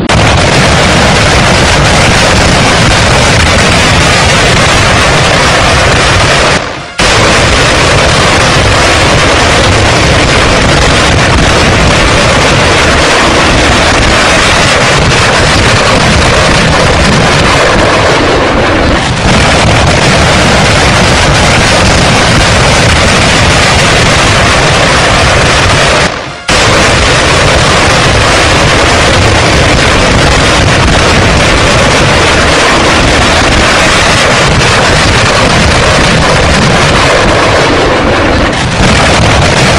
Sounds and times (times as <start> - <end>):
Artillery fire: 0.0 - 39.7.